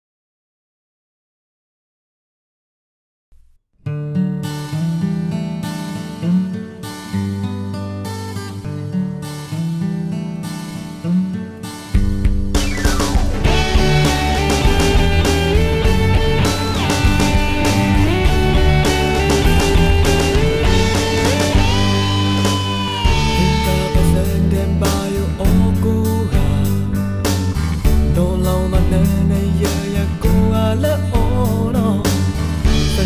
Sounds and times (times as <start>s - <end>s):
Music: 3.4s - 33.0s.